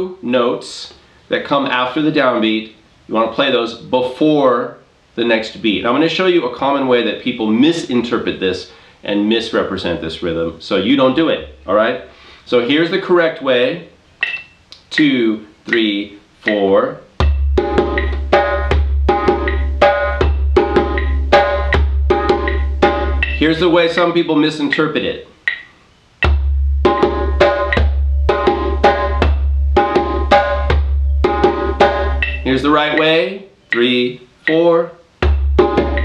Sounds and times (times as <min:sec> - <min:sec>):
Speech: 0:00.0 - 0:14.0, 0:14.8 - 0:17.1, 0:23.4 - 0:25.3, 0:32.4 - 0:35.0
Inside, small room: 0:00.0 - 0:36.0
Drum: 0:15.7 - 0:24.2, 0:26.2 - 0:33.2, 0:35.2 - 0:36.0.